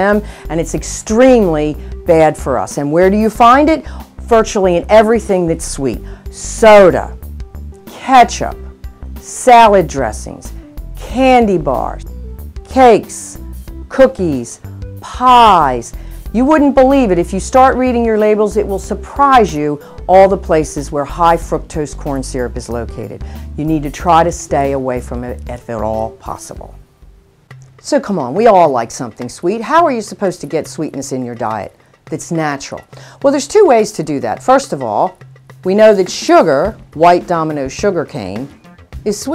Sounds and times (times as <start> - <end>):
Speech: 0.0 - 7.2, 7.9 - 8.6, 9.3 - 12.0, 12.7 - 26.8, 27.8 - 39.3
Music: 0.0 - 39.3.